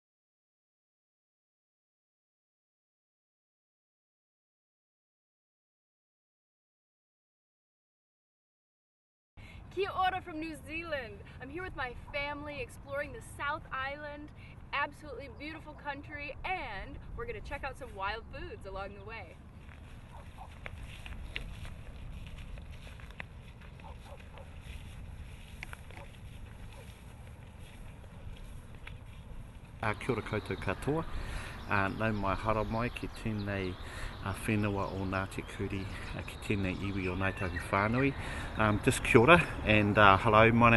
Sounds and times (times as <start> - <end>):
Speech: 9.8 - 19.4, 29.8 - 31.1, 31.7 - 40.7
Walk, footsteps: 19.6 - 29.8.